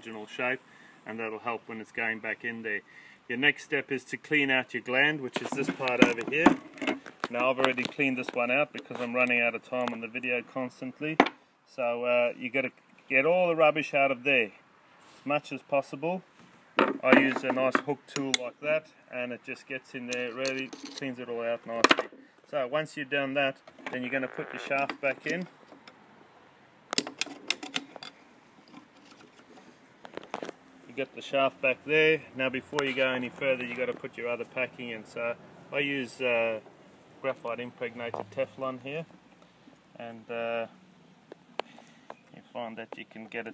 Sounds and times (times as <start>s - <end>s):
Speech: 0.0s - 6.6s, 7.3s - 14.6s, 15.2s - 16.3s, 17.0s - 25.5s, 30.9s - 36.6s, 37.2s - 39.1s, 40.0s - 40.7s, 42.4s - 43.5s.